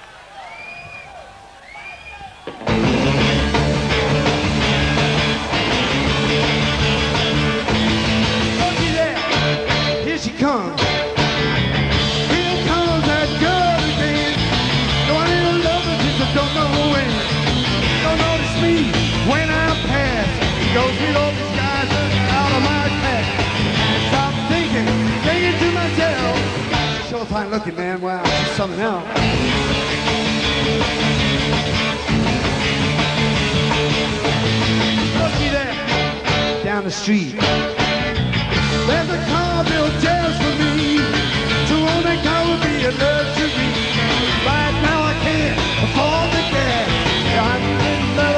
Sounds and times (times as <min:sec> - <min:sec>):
Punk rock: 0:02.3 - 0:48.3.